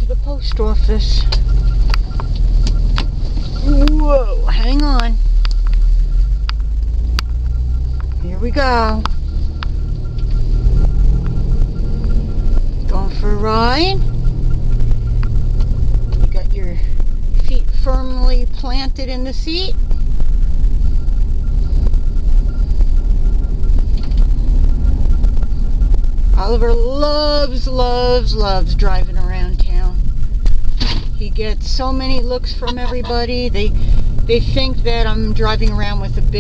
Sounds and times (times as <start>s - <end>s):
Speech: 0.0s - 1.3s, 3.6s - 5.2s, 8.2s - 9.0s, 12.9s - 14.1s, 16.3s - 19.8s, 26.4s - 30.0s, 31.2s - 36.4s.